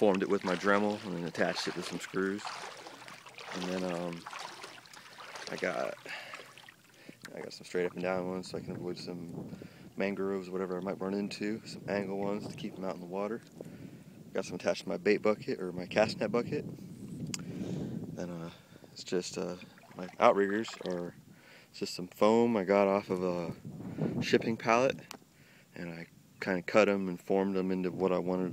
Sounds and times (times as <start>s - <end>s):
Speech: 0.0s - 2.5s, 3.6s - 4.2s, 5.5s - 6.1s, 7.3s - 9.3s, 10.0s - 13.4s, 14.4s - 16.6s, 18.2s - 21.2s, 21.8s - 23.6s, 24.2s - 25.1s, 25.8s - 28.5s
Rowboat, canoe, kayak: 0.0s - 28.5s.